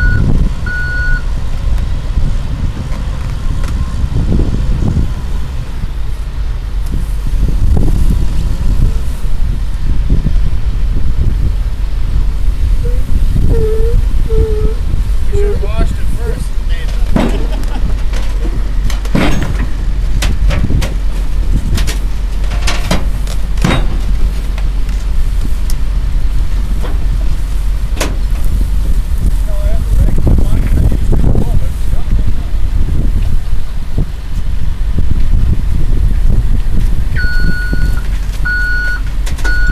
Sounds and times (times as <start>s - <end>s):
Speech: 15.3s - 17.0s, 29.4s - 32.5s.